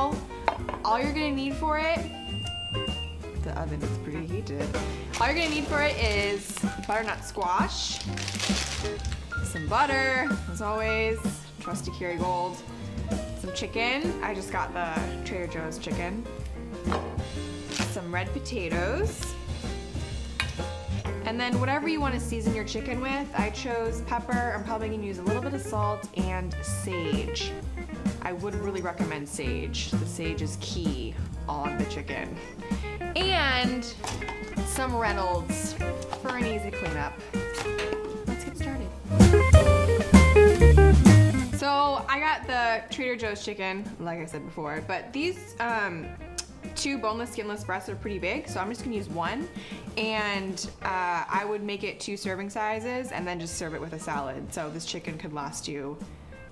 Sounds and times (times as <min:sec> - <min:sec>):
Music: 0:00.0 - 0:56.5
Speech: 0:03.4 - 0:08.0, 0:13.4 - 0:16.2, 0:17.8 - 0:19.3, 0:21.2 - 0:27.5, 0:28.2 - 0:32.4, 0:33.2 - 0:34.0, 0:34.7 - 0:37.2, 0:38.3 - 0:38.9, 0:41.6 - 0:46.1, 0:46.8 - 0:56.0.